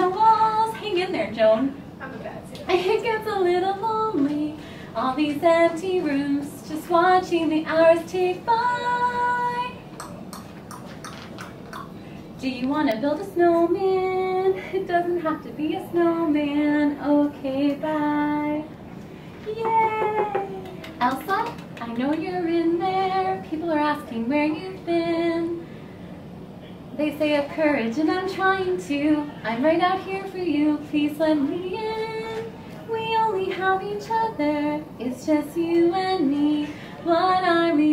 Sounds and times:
Female singing: 0:00.0 - 0:01.8, 0:02.6 - 0:09.8, 0:12.4 - 0:18.7, 0:19.5 - 0:25.6, 0:27.0 - 0:37.9.

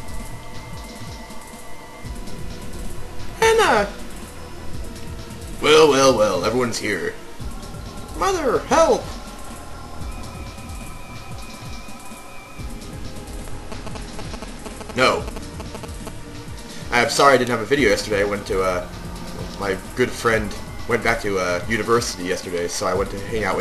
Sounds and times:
Music: 0:00.0 - 0:23.6
Speech: 0:03.4 - 0:04.0, 0:05.6 - 0:07.2, 0:08.2 - 0:09.1, 0:15.0 - 0:15.3, 0:16.9 - 0:18.8, 0:19.6 - 0:23.6.

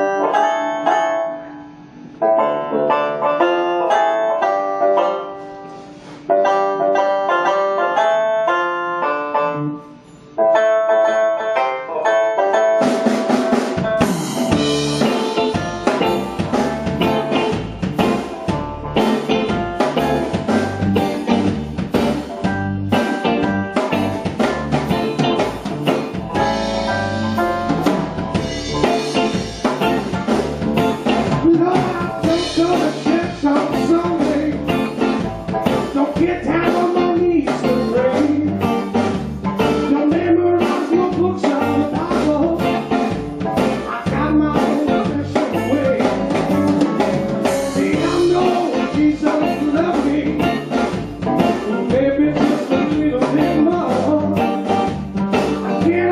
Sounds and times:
Keyboard (musical): 0:00.0 - 0:56.1
Drum kit: 0:11.4 - 0:56.1.

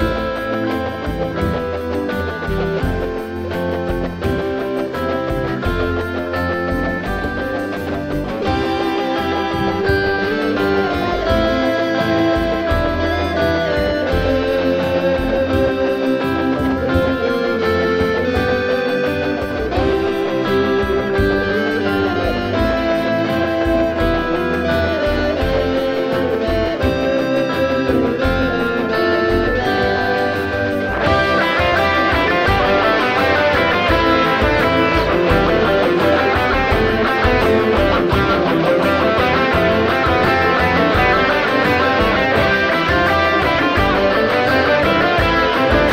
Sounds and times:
Guitar: 0:00.0 - 0:45.9
Inside, small room: 0:00.0 - 0:45.9.

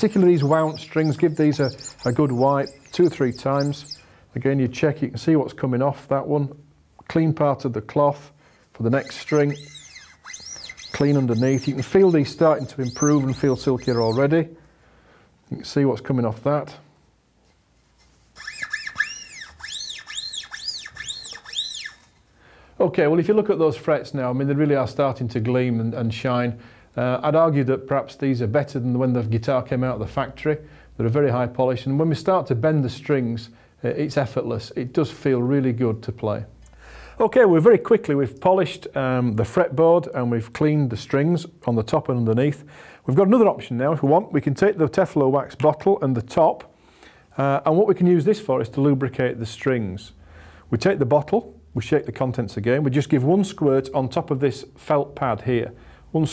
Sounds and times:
Speech: 0:00.0 - 0:09.8, 0:10.9 - 0:14.6, 0:15.5 - 0:16.9, 0:22.8 - 0:36.6, 0:37.2 - 0:46.7, 0:47.4 - 0:56.3.

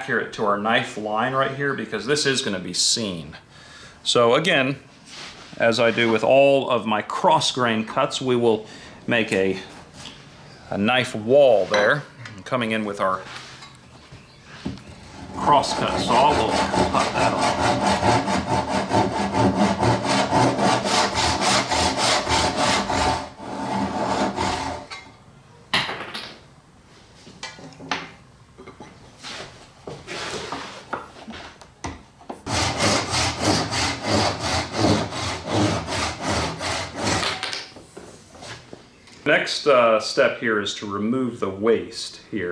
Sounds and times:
Wood: 0:14.6 - 0:25.0
Sawing: 0:15.0 - 0:25.0, 0:32.4 - 0:37.4.

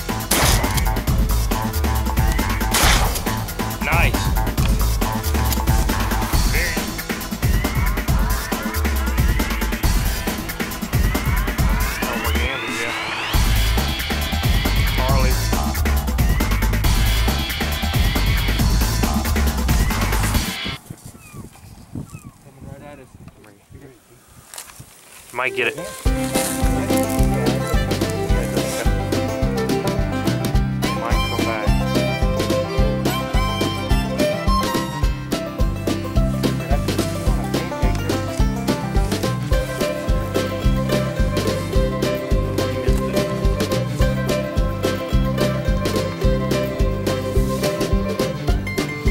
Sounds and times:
Music: 0:00.0 - 0:20.8, 0:25.4 - 0:49.1
Speech: 0:03.8 - 0:04.3, 0:12.0 - 0:13.0, 0:22.4 - 0:24.2, 0:25.3 - 0:25.8, 0:30.9 - 0:31.7.

